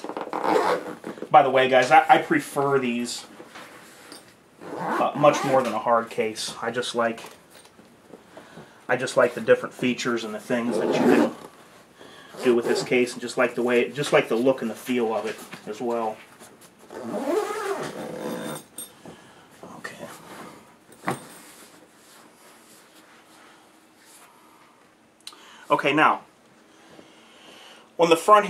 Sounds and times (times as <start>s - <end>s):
Inside, small room: 0.0s - 28.4s
Speech: 1.3s - 3.3s, 4.9s - 7.4s, 8.9s - 11.4s, 12.4s - 16.3s, 19.7s - 20.3s, 25.7s - 26.3s, 28.0s - 28.4s.